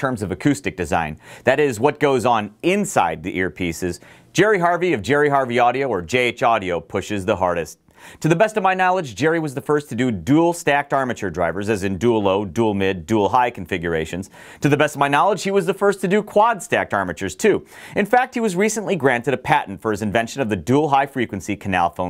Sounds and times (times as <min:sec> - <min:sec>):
Speech: 0:00.0 - 0:22.1.